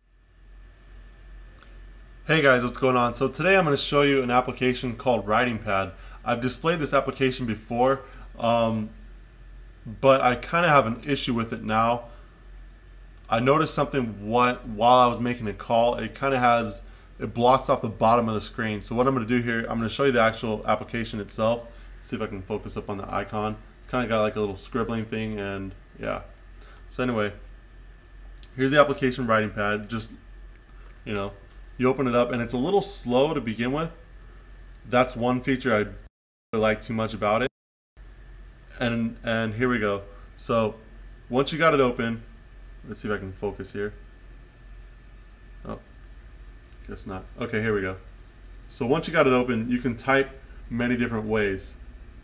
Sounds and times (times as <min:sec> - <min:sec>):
Speech: 0:02.3 - 0:09.0, 0:09.9 - 0:12.1, 0:13.3 - 0:27.4, 0:28.5 - 0:30.2, 0:31.0 - 0:34.0, 0:34.9 - 0:37.5, 0:38.7 - 0:42.3, 0:42.9 - 0:44.0, 0:45.6 - 0:45.9, 0:46.8 - 0:48.1, 0:48.7 - 0:51.8.